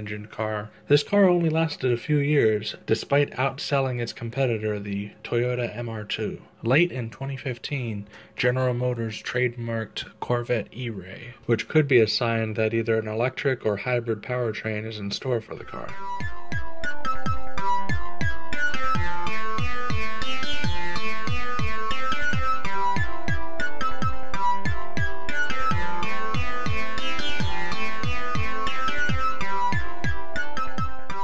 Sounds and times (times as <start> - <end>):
Speech: 0.0 - 16.0.